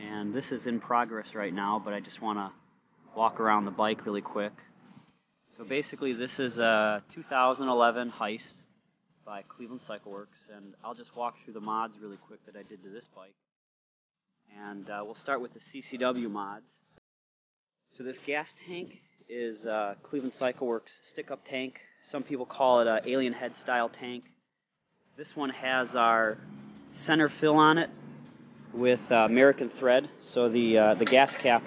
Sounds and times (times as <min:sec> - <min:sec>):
Speech: 0:00.0 - 0:02.5, 0:03.2 - 0:04.6, 0:05.6 - 0:08.6, 0:09.3 - 0:13.3, 0:14.5 - 0:16.6, 0:18.0 - 0:24.2, 0:25.2 - 0:26.4, 0:27.0 - 0:27.9, 0:28.8 - 0:31.6.